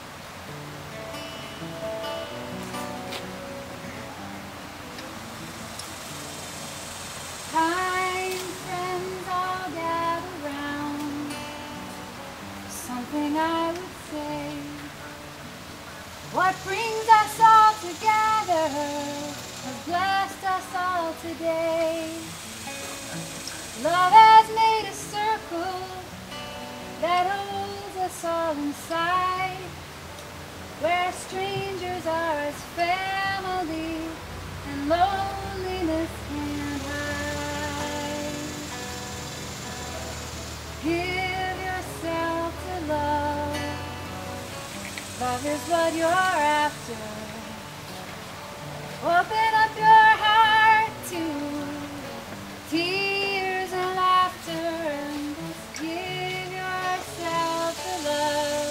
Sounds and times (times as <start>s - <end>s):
Music: 0.0s - 58.7s.